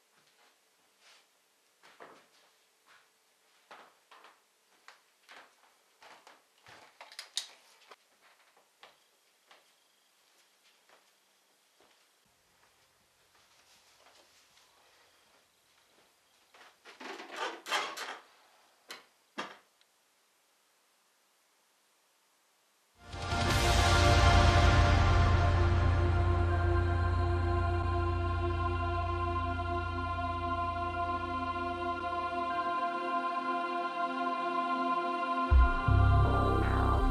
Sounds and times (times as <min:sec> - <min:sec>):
Inside, small room: 0:00.0 - 0:37.1.